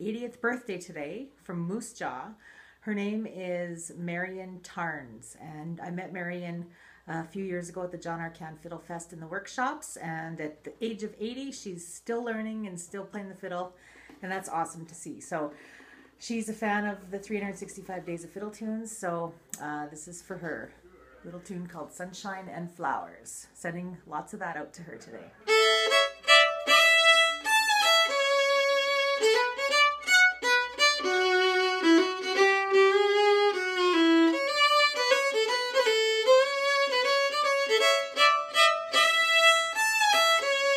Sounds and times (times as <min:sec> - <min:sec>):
Speech: 0:00.0 - 0:15.6, 0:16.2 - 0:25.5.